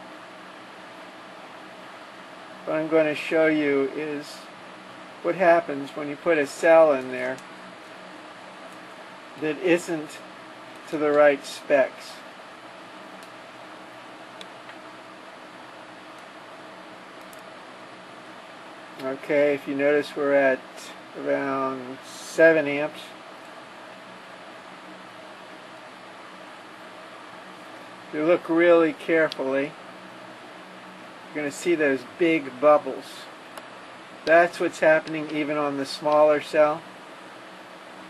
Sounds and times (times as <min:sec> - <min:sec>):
Speech: 0:02.7 - 0:04.5, 0:05.2 - 0:07.4, 0:09.4 - 0:10.3, 0:10.9 - 0:12.3, 0:19.0 - 0:23.2, 0:28.1 - 0:29.8, 0:31.3 - 0:33.4, 0:34.3 - 0:36.9.